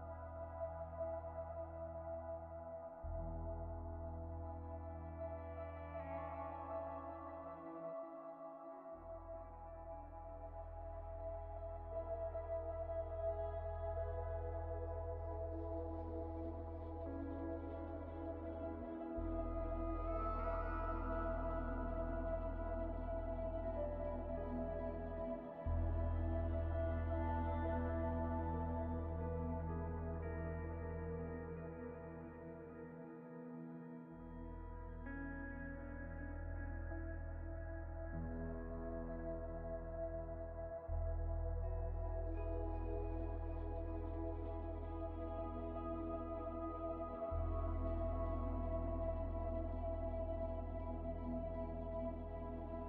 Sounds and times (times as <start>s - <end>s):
Music: 0.0s - 52.8s.